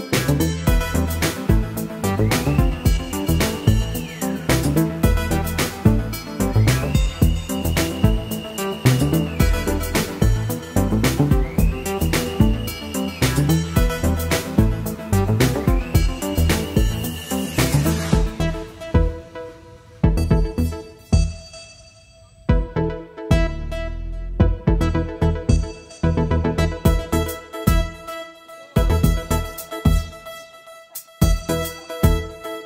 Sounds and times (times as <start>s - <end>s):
Synthesizer: 0.0s - 32.6s.